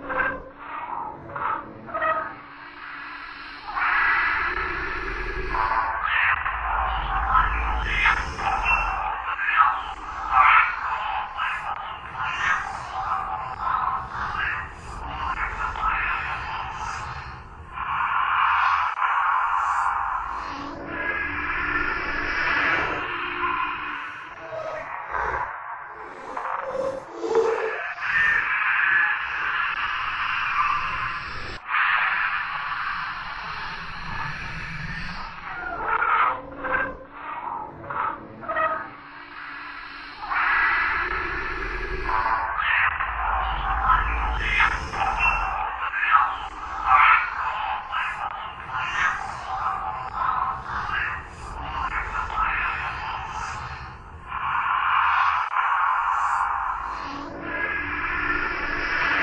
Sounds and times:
Distortion: 0:00.0 - 0:36.0, 0:36.8 - 0:59.2
Sound effect: 0:00.0 - 0:59.2.

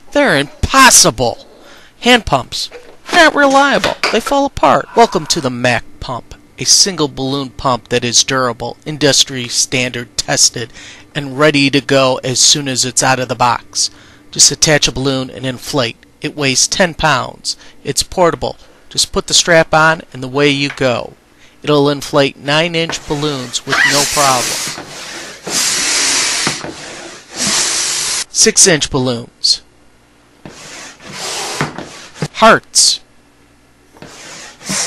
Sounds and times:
Speech: 0:00.1 - 0:24.6, 0:28.4 - 0:29.7, 0:32.2 - 0:33.1.

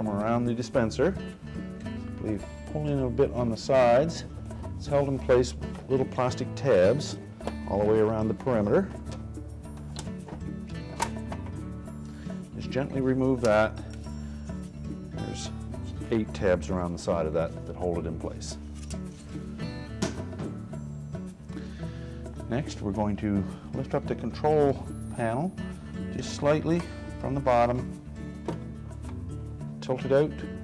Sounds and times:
Speech: 0:00.0 - 0:01.2, 0:02.2 - 0:08.9, 0:12.6 - 0:13.8, 0:15.2 - 0:18.6, 0:22.5 - 0:25.5, 0:26.1 - 0:27.9, 0:29.8 - 0:30.5
Music: 0:00.0 - 0:30.6.

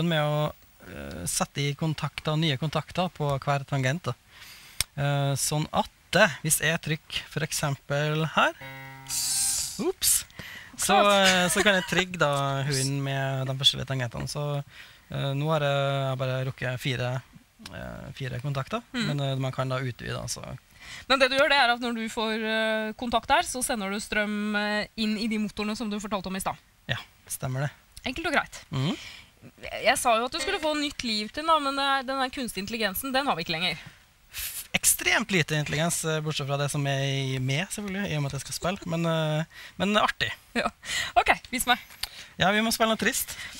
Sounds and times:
Speech: 0:09.8 - 0:29.0, 0:34.8 - 0:40.3.

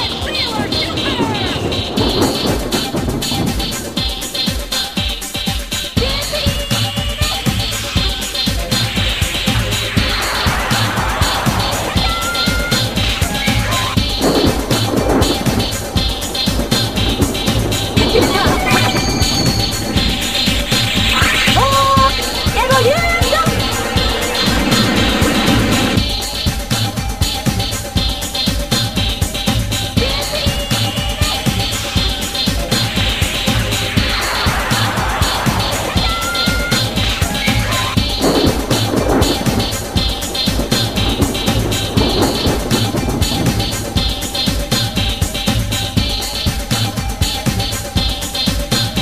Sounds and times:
Techno: 0:00.0 - 0:49.0.

